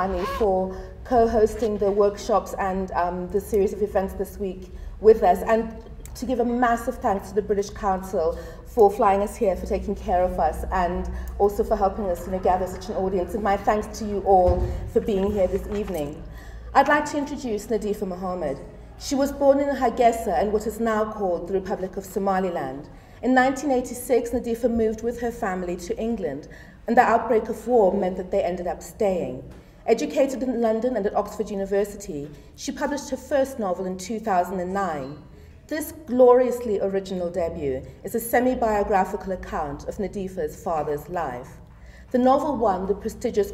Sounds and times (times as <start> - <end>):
Female speech, woman speaking: 0.0 - 43.5.